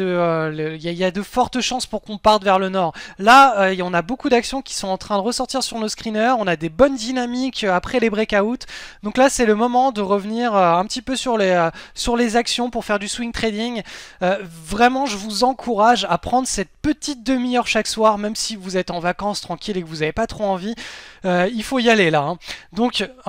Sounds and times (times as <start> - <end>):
Speech: 0.0 - 23.2.